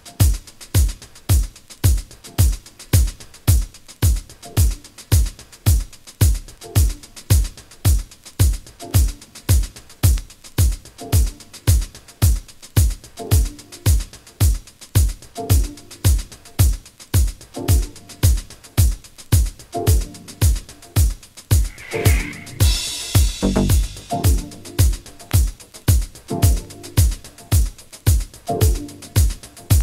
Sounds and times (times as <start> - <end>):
Music: 0.0 - 29.8.